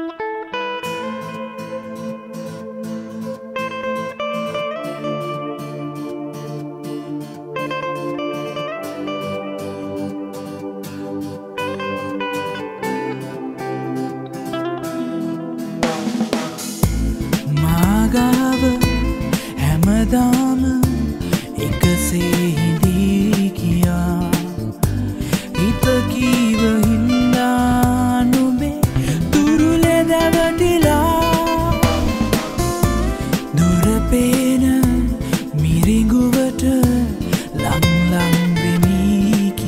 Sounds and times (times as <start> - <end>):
Blues: 0.0 - 39.6
Rhythm and blues: 0.0 - 39.6
Middle Eastern music: 15.8 - 39.6.